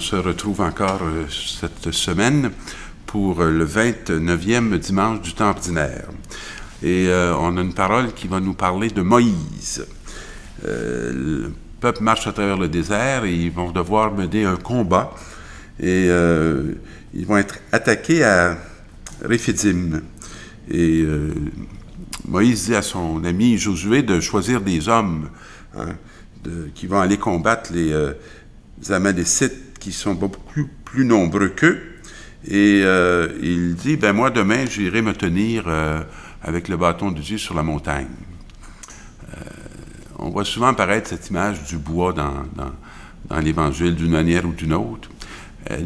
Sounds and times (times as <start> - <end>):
Speech: 0.0 - 10.0, 10.6 - 15.2, 15.8 - 28.2, 28.8 - 38.4, 39.2 - 45.8.